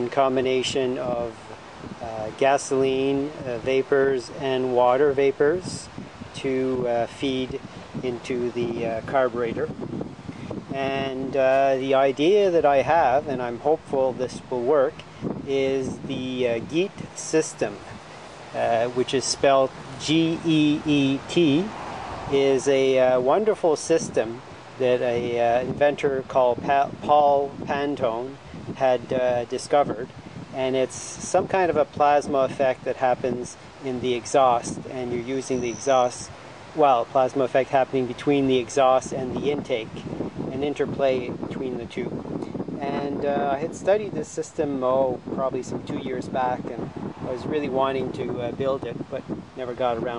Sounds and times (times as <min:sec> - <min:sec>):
Speech: 0:00.0 - 0:09.7, 0:10.7 - 0:17.9, 0:18.6 - 0:21.7, 0:22.3 - 0:42.2, 0:42.8 - 0:50.1.